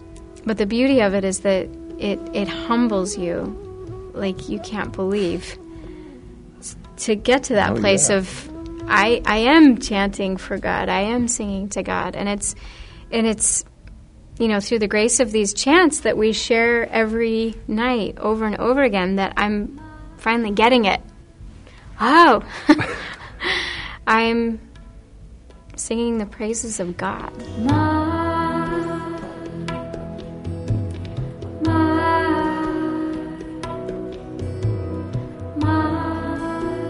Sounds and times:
Speech: 0:07.0 - 0:12.5.

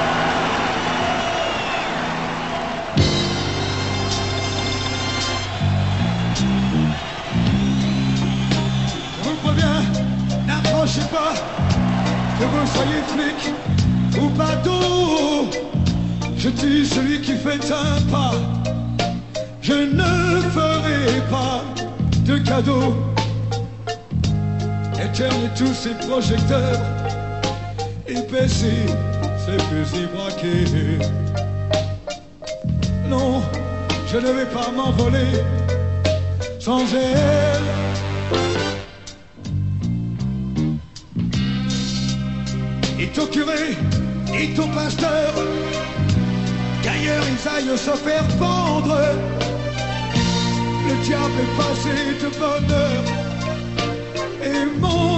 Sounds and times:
Music: 0:00.0 - 0:55.1.

